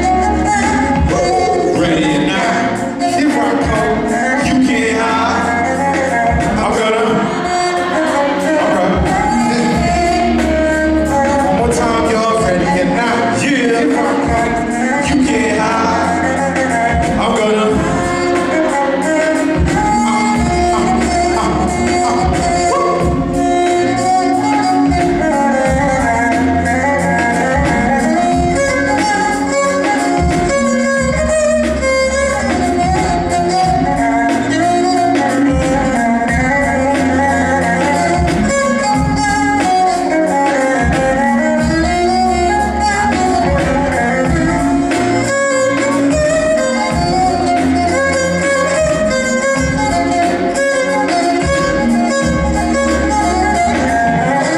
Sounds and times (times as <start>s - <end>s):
Violin, fiddle: 0.0s - 54.5s.